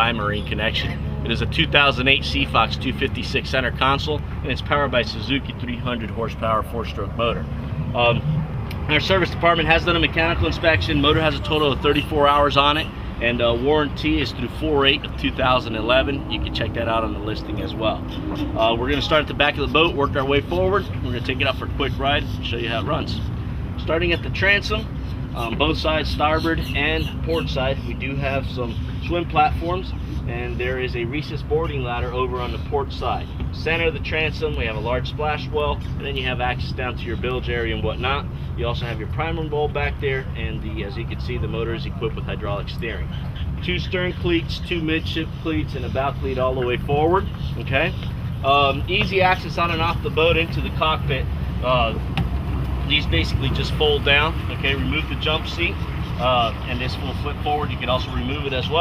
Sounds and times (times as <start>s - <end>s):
Speech: 0.0s - 7.4s, 8.0s - 8.2s, 8.9s - 52.0s, 52.9s - 58.8s.